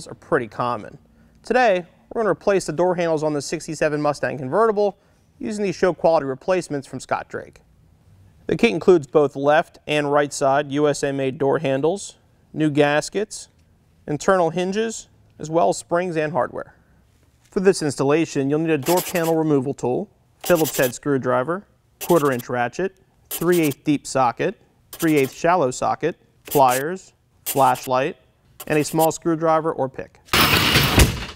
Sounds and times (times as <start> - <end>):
Speech: 0.0 - 7.6, 8.5 - 16.8, 17.5 - 30.2.